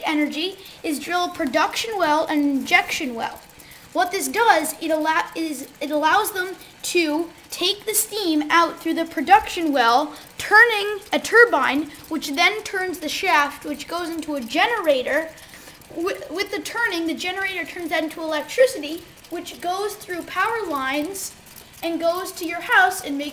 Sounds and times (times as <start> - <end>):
Speech: 0.0 - 23.3.